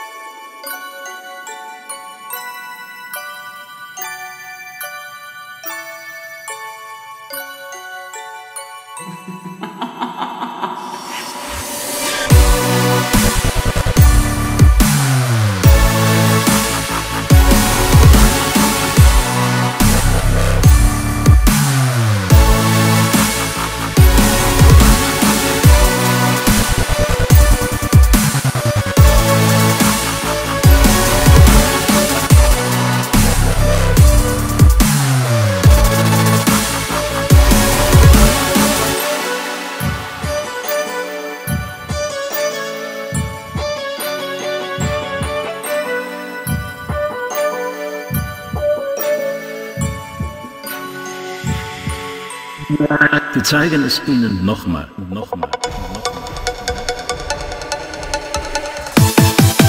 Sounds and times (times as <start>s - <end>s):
Jingle, tinkle: 0.0s - 53.7s.